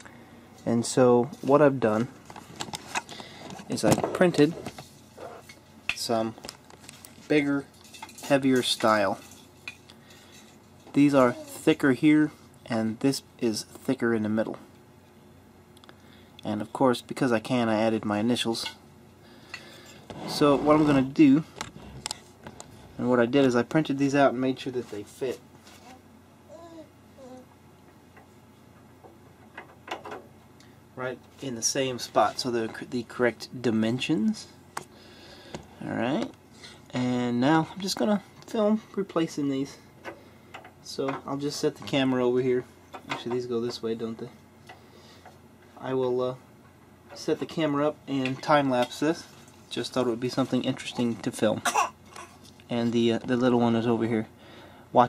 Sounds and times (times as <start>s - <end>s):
Speech: 0.6s - 2.1s, 7.3s - 9.2s, 10.9s - 14.6s, 16.4s - 18.8s, 20.3s - 21.5s, 23.0s - 25.4s, 31.0s - 34.6s, 35.8s - 39.8s, 40.8s - 44.4s, 45.8s - 46.4s, 47.2s - 51.7s, 52.7s - 54.3s.